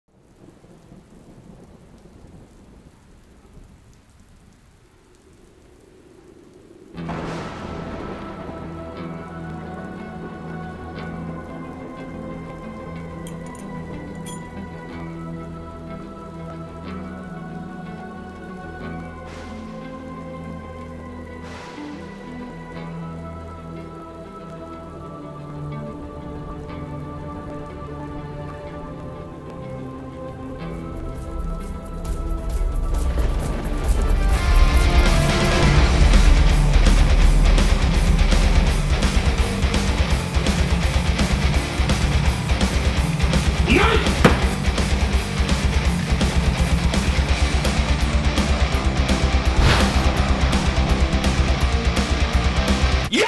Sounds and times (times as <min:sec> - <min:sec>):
Rain on surface: 0:00.0 - 0:53.2
Thunder: 0:06.0 - 0:09.6.